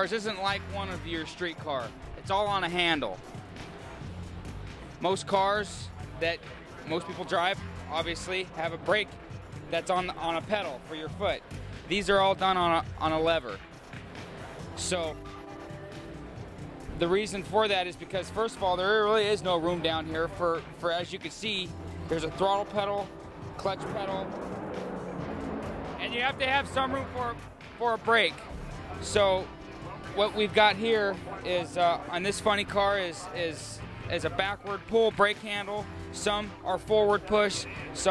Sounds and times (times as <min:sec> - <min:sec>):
Speech: 0:00.0 - 0:03.2, 0:05.0 - 0:13.6, 0:14.8 - 0:15.2, 0:17.0 - 0:24.3, 0:26.0 - 0:38.1
Music: 0:00.0 - 0:38.1.